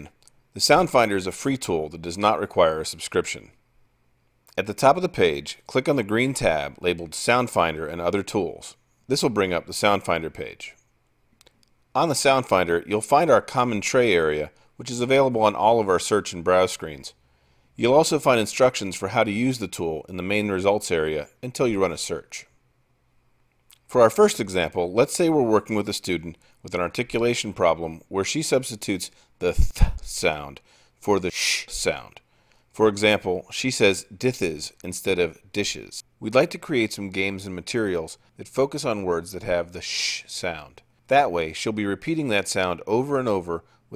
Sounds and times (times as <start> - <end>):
Speech: 0.0 - 3.6, 4.5 - 10.8, 11.9 - 17.2, 17.8 - 22.5, 23.7 - 43.9.